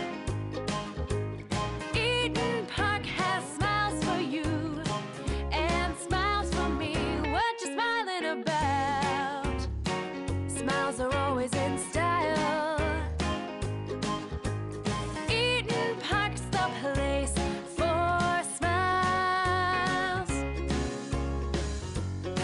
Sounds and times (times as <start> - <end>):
Music: 0.0 - 22.4.